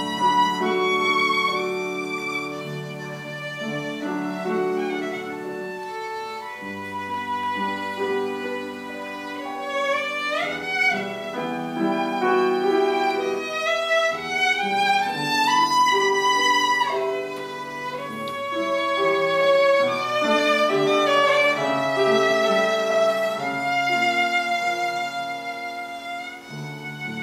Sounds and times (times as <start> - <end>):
Violin, fiddle: 0.0 - 27.2.